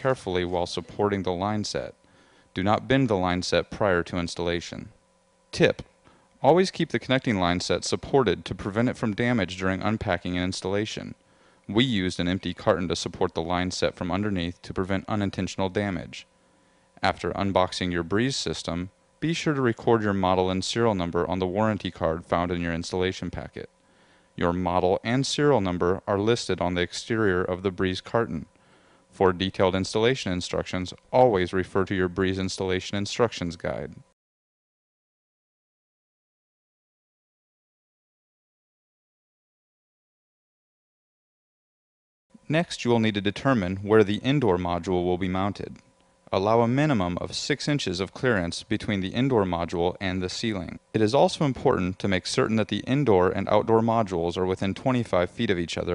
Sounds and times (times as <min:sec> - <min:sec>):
Speech: 0:00.0 - 0:02.0, 0:02.6 - 0:16.3, 0:17.0 - 0:23.7, 0:24.4 - 0:28.5, 0:29.2 - 0:34.2, 0:42.4 - 0:55.9.